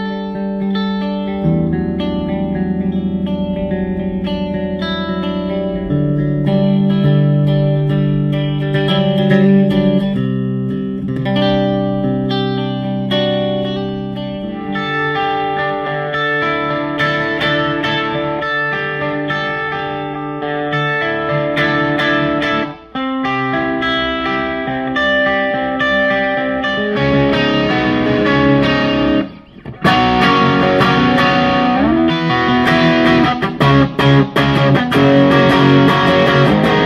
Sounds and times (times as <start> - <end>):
Electronic tuner: 0.0 - 36.8
Guitar: 0.0 - 36.8
Inside, small room: 0.0 - 36.8.